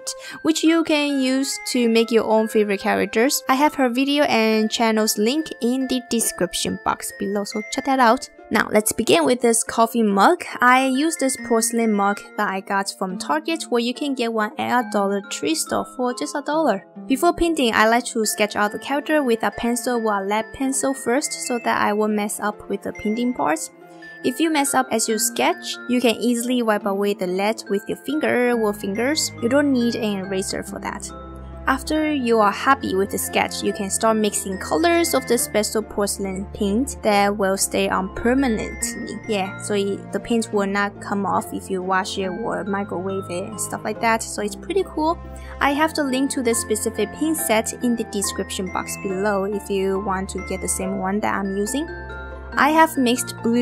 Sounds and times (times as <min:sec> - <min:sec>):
Speech: 0:00.0 - 0:23.7, 0:24.3 - 0:31.1, 0:31.7 - 0:51.9, 0:52.6 - 0:53.6
Music: 0:00.0 - 0:53.6.